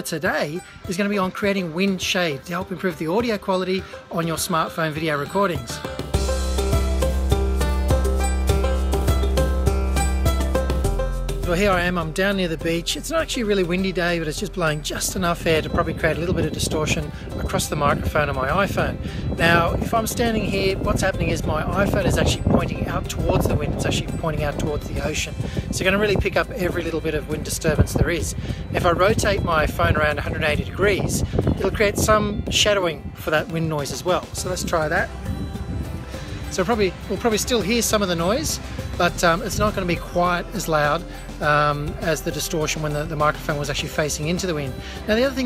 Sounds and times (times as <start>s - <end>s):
Speech: 0.0s - 5.8s, 11.4s - 35.1s, 36.5s - 45.4s
Music: 0.0s - 45.4s.